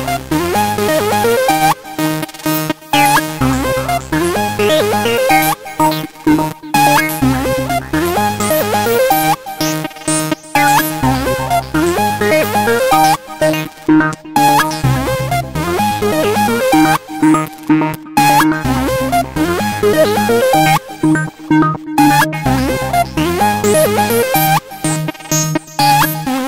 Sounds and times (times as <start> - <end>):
Music: 0.0 - 26.4.